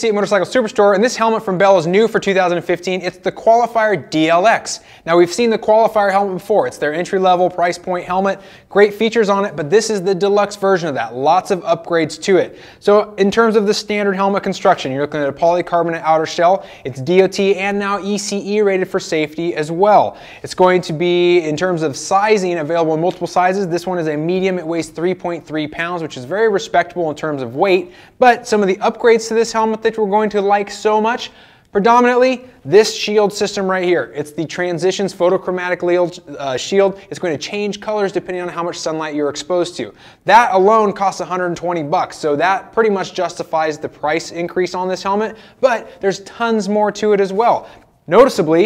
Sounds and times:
Speech: 0:00.0 - 0:48.6.

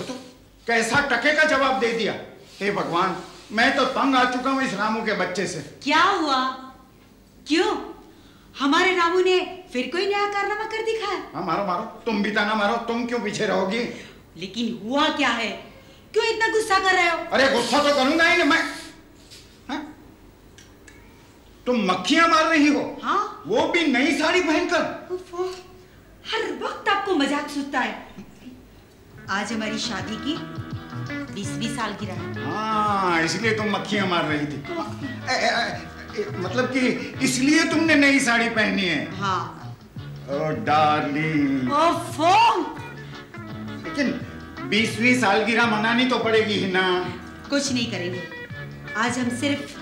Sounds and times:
Female speech, woman speaking: 0:05.8 - 0:06.8, 0:07.4 - 0:08.0, 0:08.6 - 0:11.3, 0:14.4 - 0:17.3, 0:26.2 - 0:28.1, 0:29.2 - 0:30.5, 0:31.2 - 0:32.4, 0:39.1 - 0:39.8, 0:41.7 - 0:42.8, 0:47.5 - 0:48.3, 0:48.9 - 0:49.8.

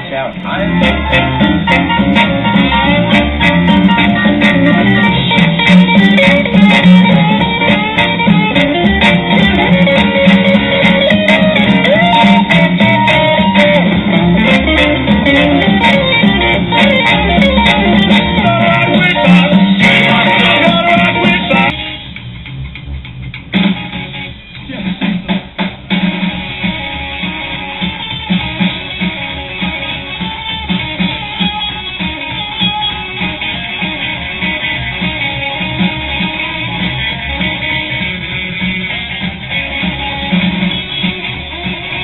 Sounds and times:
Electric guitar: 0:00.0 - 0:42.0.

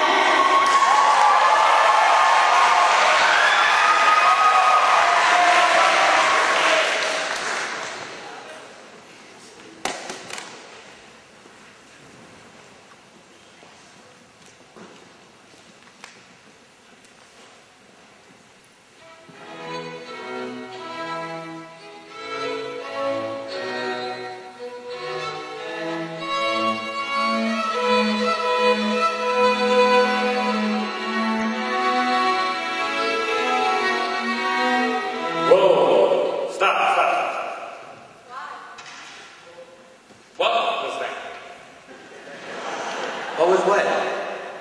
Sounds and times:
Music: 0:19.0 - 0:36.5.

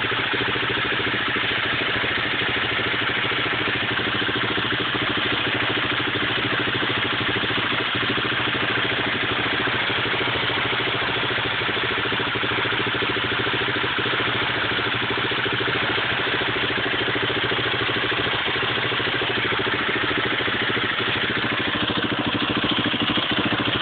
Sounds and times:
Medium engine (mid frequency): 0:00.0 - 0:23.8
Vehicle: 0:00.0 - 0:23.8.

